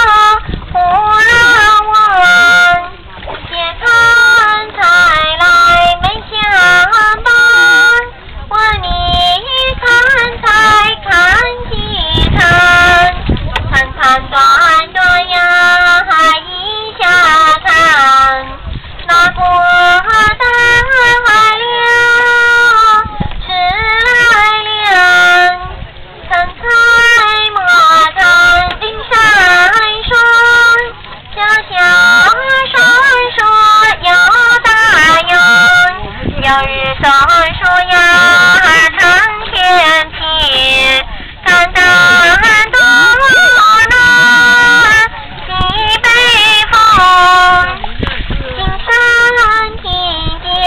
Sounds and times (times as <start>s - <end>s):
Female singing: 0.0s - 50.6s.